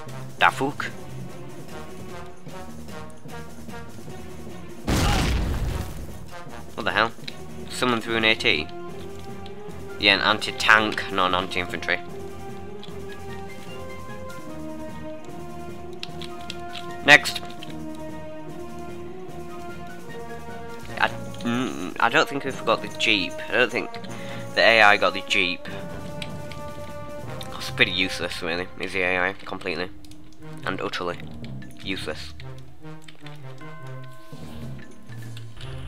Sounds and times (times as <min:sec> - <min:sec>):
Outside, rural or natural: 0:00.0 - 0:08.0
Music: 0:00.0 - 0:35.8
Speech: 0:00.4 - 0:01.0, 0:06.8 - 0:08.7, 0:10.0 - 0:12.0, 0:17.1 - 0:17.4, 0:21.0 - 0:24.0, 0:24.6 - 0:25.8, 0:27.6 - 0:29.9, 0:30.6 - 0:31.2, 0:31.8 - 0:32.4.